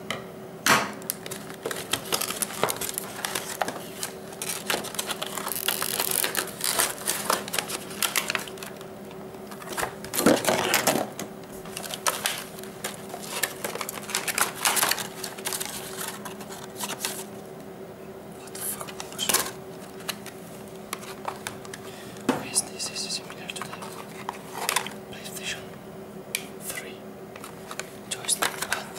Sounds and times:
Speech: 22.3 - 23.8.

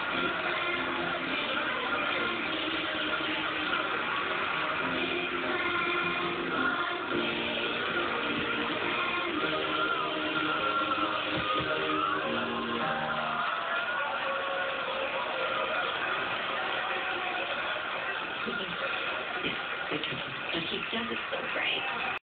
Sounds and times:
Speech: 19.9 - 22.2.

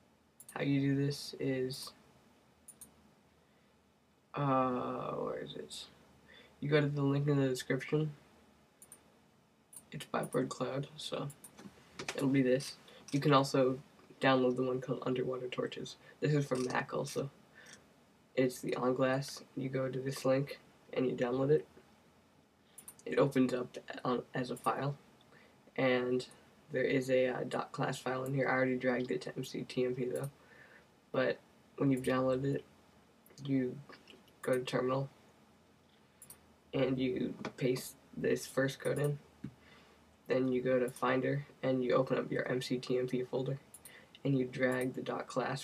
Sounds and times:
Speech: 0.5 - 2.0, 4.4 - 6.0, 6.6 - 8.2, 9.9 - 11.4, 12.0 - 17.4, 18.4 - 21.8, 23.0 - 25.0, 25.8 - 30.4, 31.2 - 32.7, 33.4 - 35.2, 36.8 - 39.2, 40.3 - 43.6, 44.2 - 45.6.

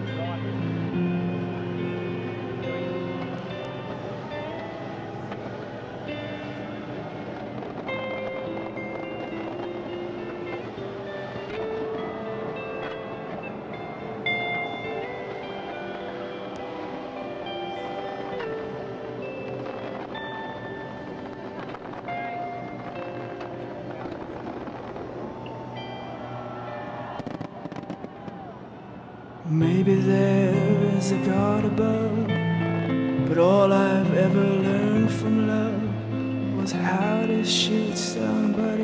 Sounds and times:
Music: 0.0 - 38.8
Fireworks: 3.2 - 16.9, 18.1 - 30.1.

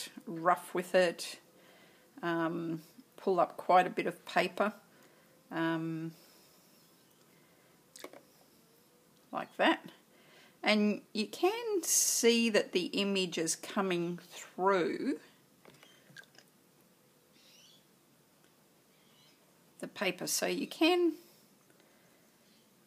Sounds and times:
Inside, small room: 0.0 - 22.8
Speech: 2.2 - 4.8, 9.3 - 10.0, 10.6 - 15.3, 19.8 - 21.2.

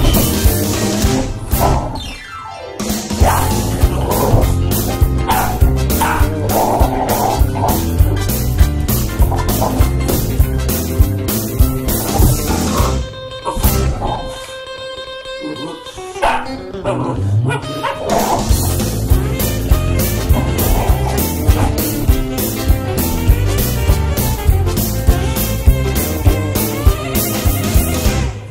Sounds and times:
Music: 0.0 - 28.5
Bow-wow: 5.2 - 8.0, 9.2 - 10.2, 15.5 - 18.8, 20.2 - 22.0
Yip: 15.6 - 18.4.

